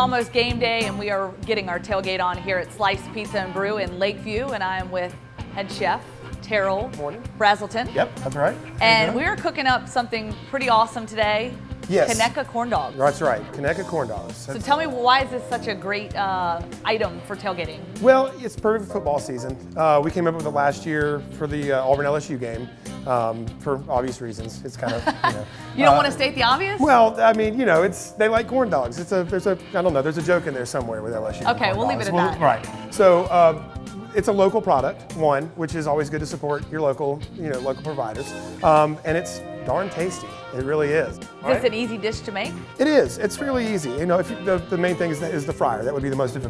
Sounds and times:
Music: 0:00.0 - 0:46.5.

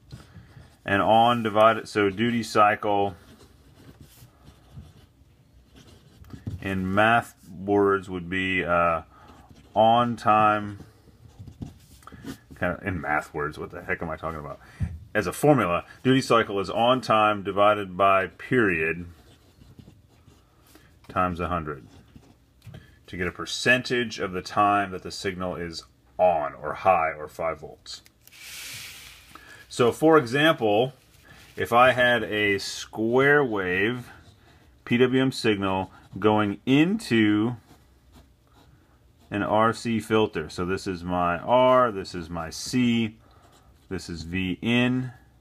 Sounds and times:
Writing: 0:00.0 - 0:07.5, 0:09.1 - 0:12.8, 0:16.0 - 0:23.1, 0:30.4 - 0:39.8, 0:42.7 - 0:44.1
Speech: 0:00.8 - 0:03.3, 0:06.6 - 0:09.1, 0:09.7 - 0:10.9, 0:12.6 - 0:19.2, 0:21.1 - 0:22.0, 0:23.1 - 0:28.1, 0:29.7 - 0:31.0, 0:31.6 - 0:34.2, 0:34.8 - 0:37.8, 0:39.3 - 0:43.2, 0:43.9 - 0:45.3.

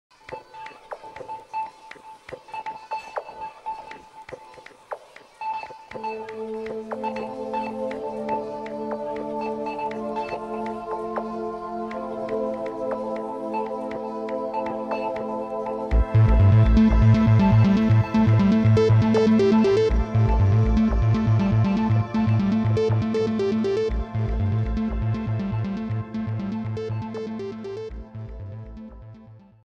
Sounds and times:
Music: 0:00.1 - 0:29.6.

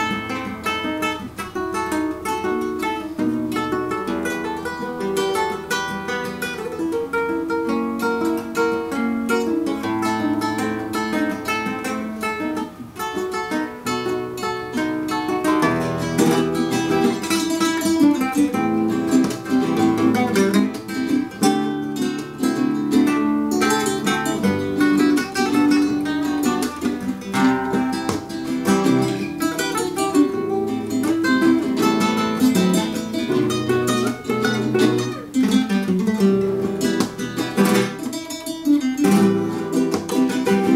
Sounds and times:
Guitar: 0:00.0 - 0:40.7.

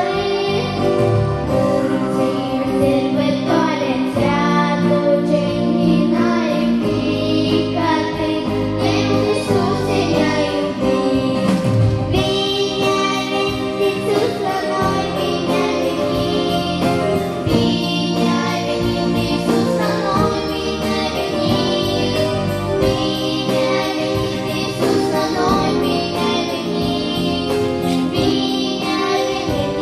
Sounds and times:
Choir: 0:00.0 - 0:29.8
Inside, large room or hall: 0:00.0 - 0:29.8.

